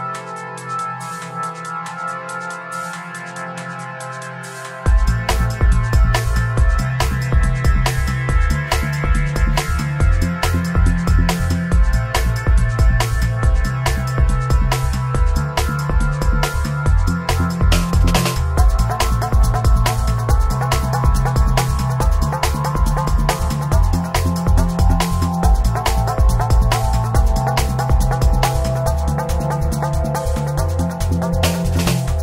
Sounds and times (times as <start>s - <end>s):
Music: 0.0s - 32.2s.